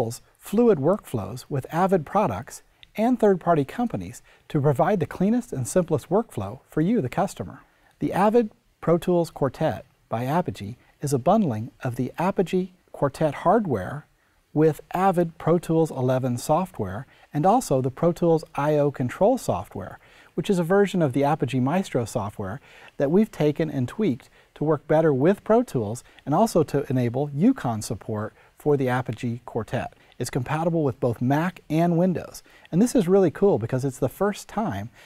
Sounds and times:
Speech: 0.0s - 35.0s.

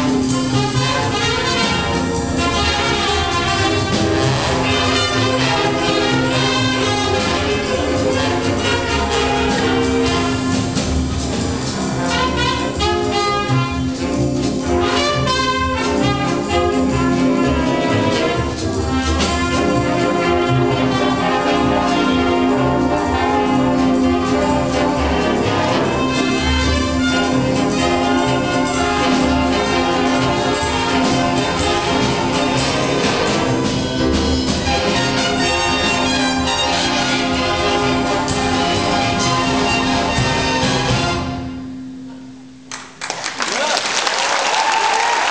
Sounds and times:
Classical music: 0.0s - 43.0s
Orchestra: 0.0s - 45.3s.

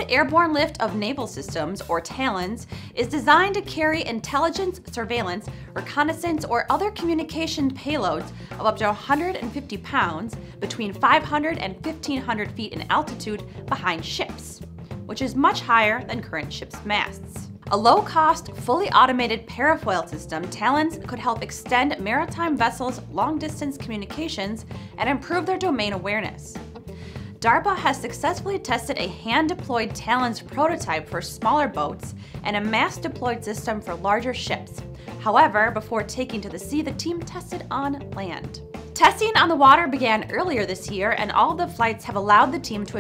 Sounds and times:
Speech: 0.0s - 26.6s, 27.4s - 43.0s
Music: 0.0s - 43.0s.

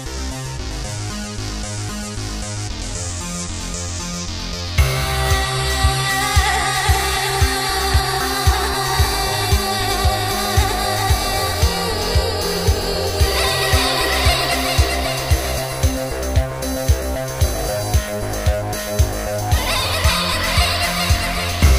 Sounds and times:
Music of Asia: 3.8s - 21.7s.

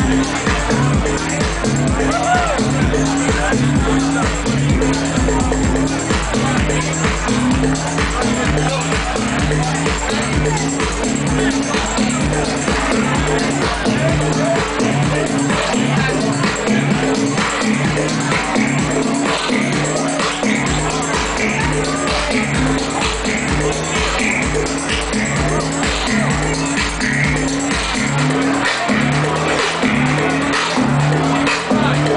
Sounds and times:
Music: 0.0s - 32.1s
Speech: 0.0s - 32.1s.

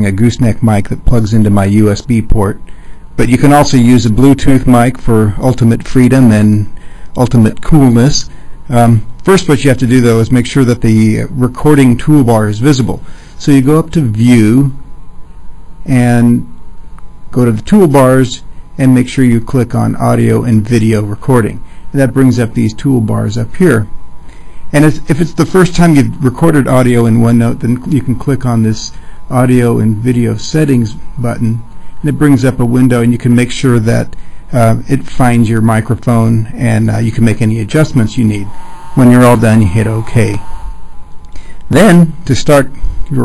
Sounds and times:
Speech: 0.0s - 14.8s, 15.8s - 16.5s, 17.3s - 23.9s, 24.7s - 40.5s, 41.7s - 43.2s.

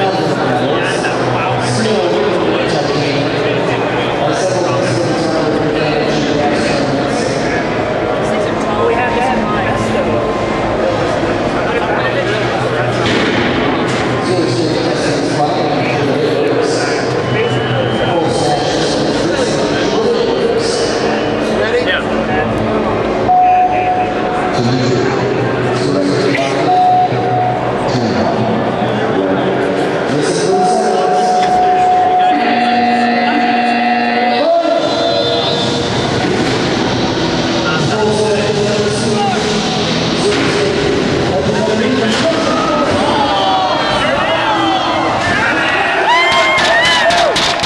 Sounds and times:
Speech: 0.0s - 13.2s, 14.2s - 22.6s, 27.8s - 35.8s, 37.6s - 46.0s.

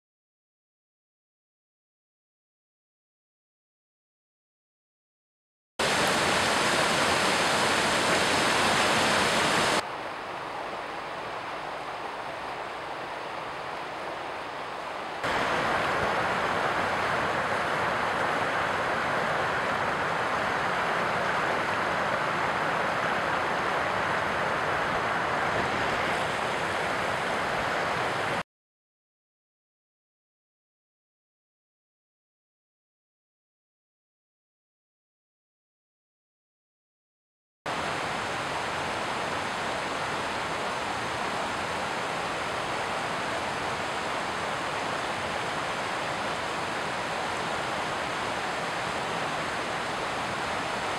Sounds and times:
Stream: 5.8s - 28.4s, 37.7s - 50.9s
Waterfall: 5.8s - 28.4s, 37.7s - 50.9s.

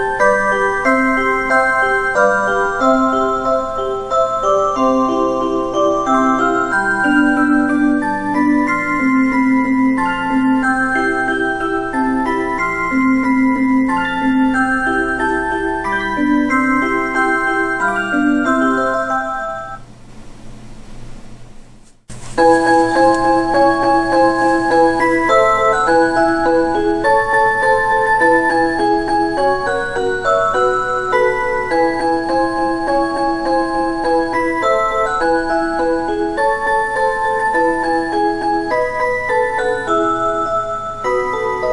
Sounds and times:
Music: 0.0s - 19.8s, 22.4s - 41.7s.

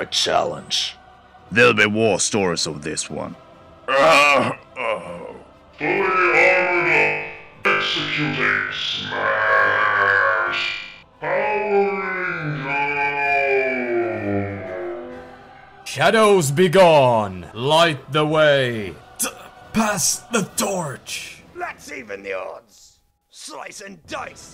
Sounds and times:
Music: 0.0s - 24.5s
Speech: 15.9s - 24.5s.

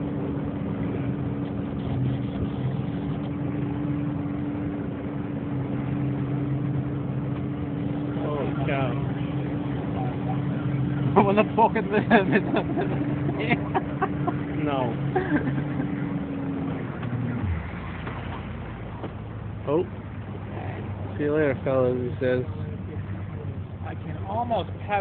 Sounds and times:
Sailboat, sailing ship: 0.0s - 25.0s.

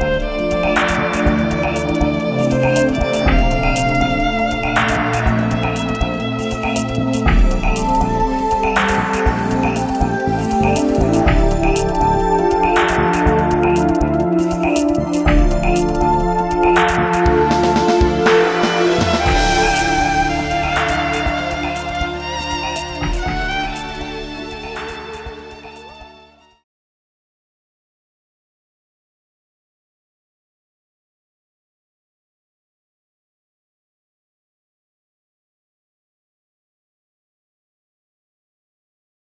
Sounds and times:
Violin, fiddle: 0.0s - 13.9s, 15.8s - 26.6s.

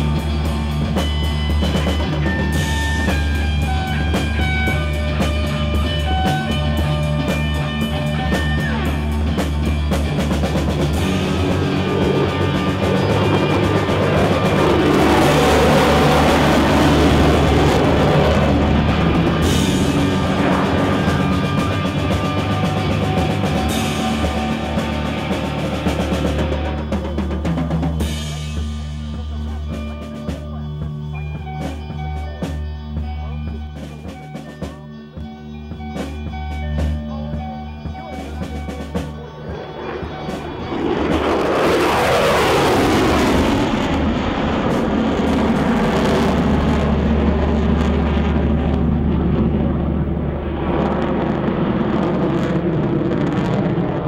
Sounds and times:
Music: 0.0s - 54.0s
Speech: 28.0s - 31.2s, 33.0s - 35.4s, 36.5s - 40.7s.

